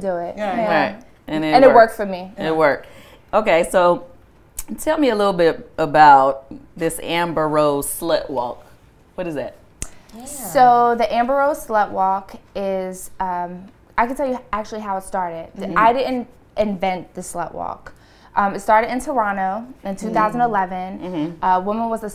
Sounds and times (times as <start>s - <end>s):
Speech: 18.4s - 22.1s.